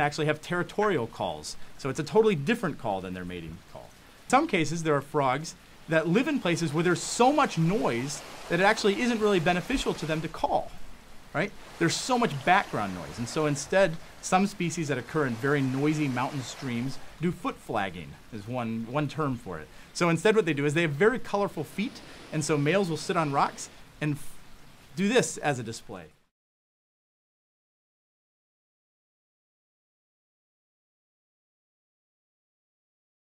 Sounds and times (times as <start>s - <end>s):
Speech: 0.0s - 10.8s, 11.4s - 24.4s, 25.0s - 26.2s.